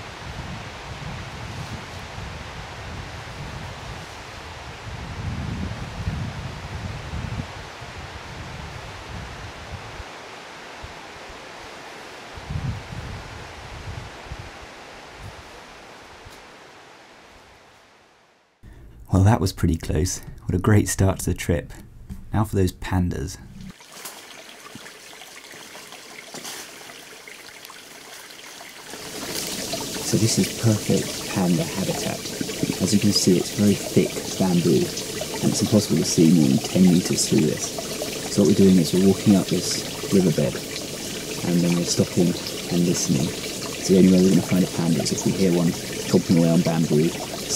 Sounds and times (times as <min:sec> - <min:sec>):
Water: 0:00.0 - 0:16.2, 0:23.6 - 0:47.5
Speech: 0:19.1 - 0:23.4, 0:30.1 - 0:37.7, 0:38.3 - 0:40.6, 0:41.4 - 0:47.5
Trickle, dribble: 0:23.6 - 0:47.5.